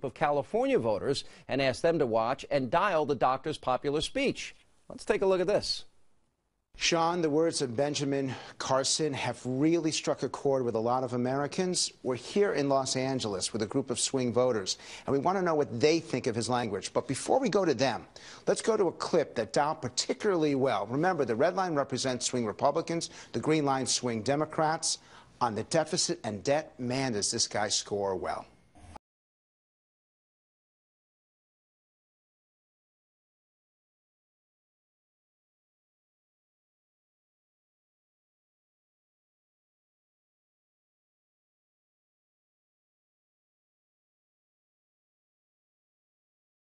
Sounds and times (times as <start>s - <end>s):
Male speech, man speaking: 0.0s - 5.9s, 6.8s - 28.5s.